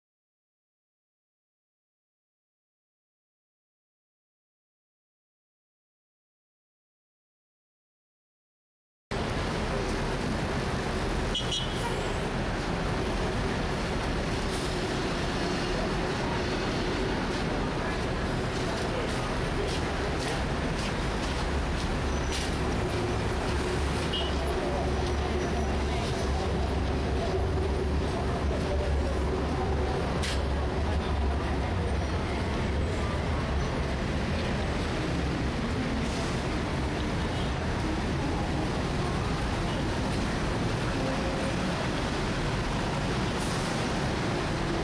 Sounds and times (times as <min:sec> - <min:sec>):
Traffic noise, roadway noise: 0:09.1 - 0:44.8.